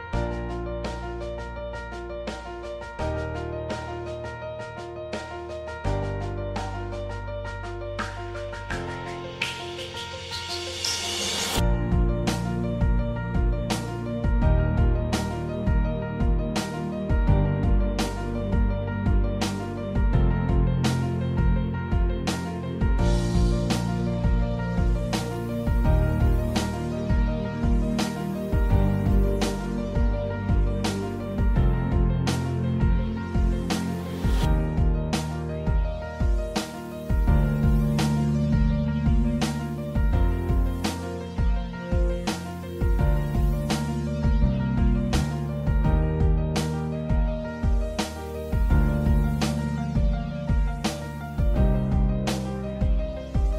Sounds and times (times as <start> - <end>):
Music: 0.0 - 53.5.